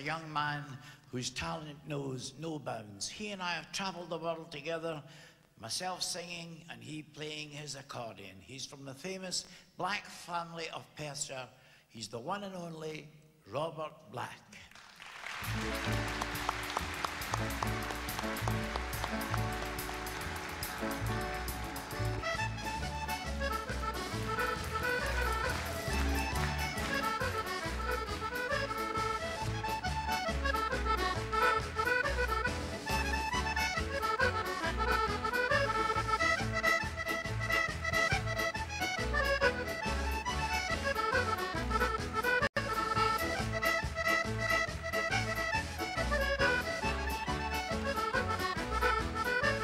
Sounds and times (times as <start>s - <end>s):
Accordion: 15.4s - 49.6s.